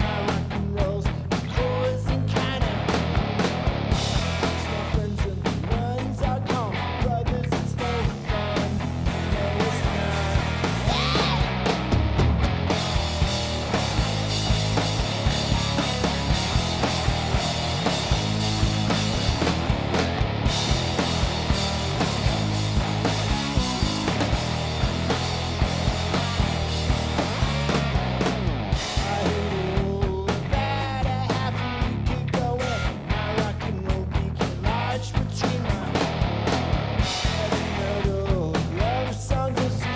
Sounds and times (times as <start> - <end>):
Rock and roll: 0.0 - 39.9.